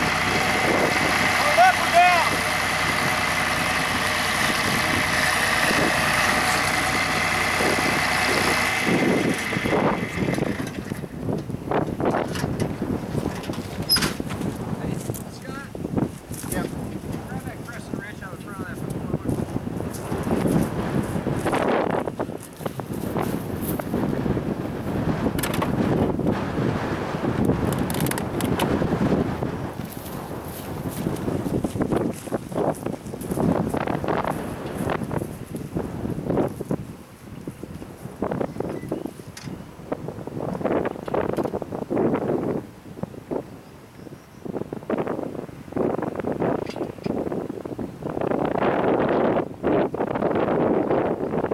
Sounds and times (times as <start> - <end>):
Wind noise (microphone): 0.0 - 51.5.